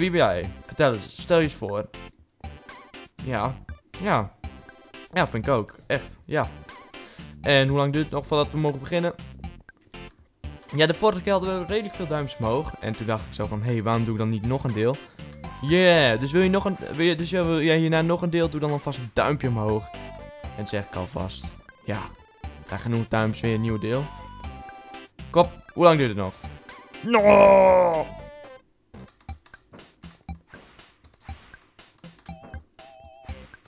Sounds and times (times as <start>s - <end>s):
Speech: 0.0s - 1.9s, 3.2s - 4.4s, 5.1s - 6.5s, 7.4s - 9.2s, 10.7s - 15.0s, 15.6s - 19.9s, 20.6s - 24.1s, 25.3s - 26.4s
Music: 0.0s - 33.6s.